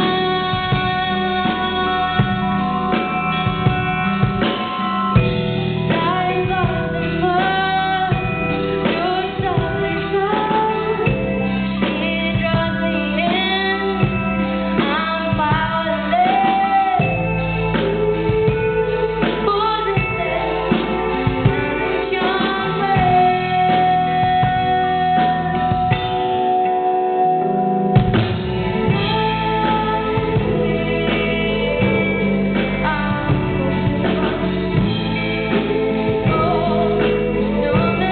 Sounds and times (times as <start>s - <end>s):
Female singing: 0.0s - 5.2s, 5.8s - 27.3s, 28.9s - 38.1s
Music: 0.0s - 38.1s.